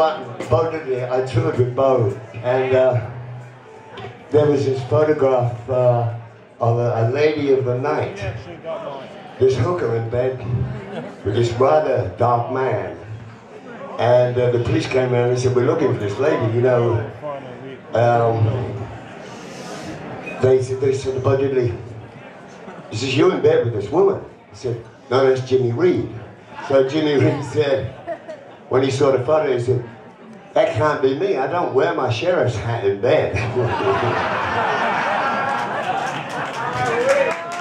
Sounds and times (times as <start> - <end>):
Speech: 0.0 - 3.1, 4.3 - 19.0, 20.4 - 22.0, 22.9 - 28.0, 28.7 - 34.2.